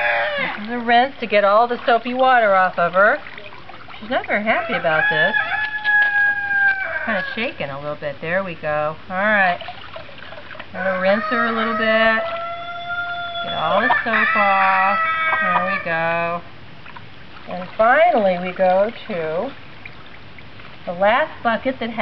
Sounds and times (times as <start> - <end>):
Chicken, rooster: 0.0 - 0.6, 4.6 - 7.4, 10.8 - 16.0
Speech: 0.4 - 3.3, 4.0 - 5.4, 7.1 - 9.6, 10.8 - 12.3, 13.5 - 16.4, 17.5 - 19.6, 20.9 - 22.0.